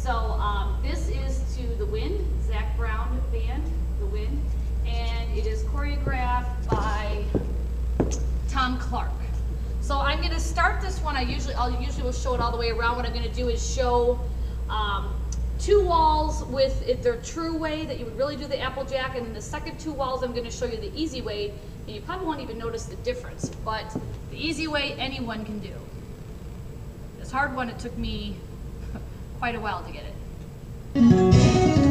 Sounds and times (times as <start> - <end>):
Speech: 0.0 - 7.4, 8.5 - 25.9, 27.2 - 28.4, 29.4 - 30.2.